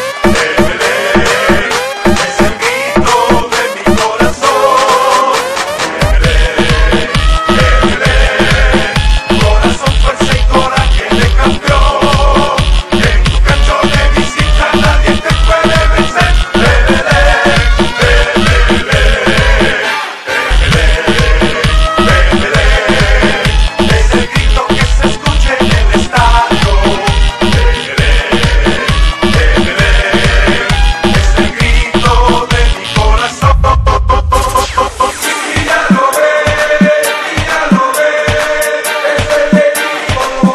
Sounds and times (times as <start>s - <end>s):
Electronica: 0.0s - 40.5s.